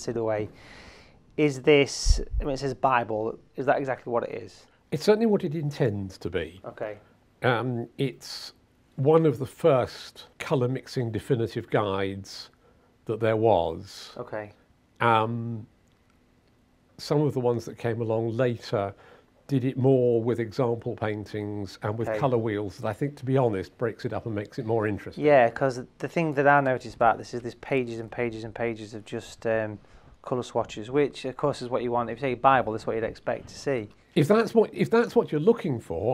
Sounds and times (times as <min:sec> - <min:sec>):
Speech: 0:00.0 - 0:00.6, 0:01.4 - 0:15.7, 0:17.0 - 0:36.1.